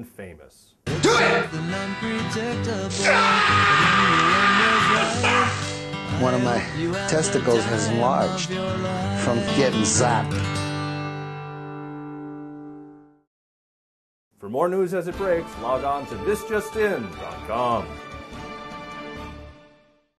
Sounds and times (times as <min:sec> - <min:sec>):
Speech: 0:00.0 - 0:01.4, 0:14.4 - 0:17.9
Music: 0:00.8 - 0:13.3, 0:14.4 - 0:20.1.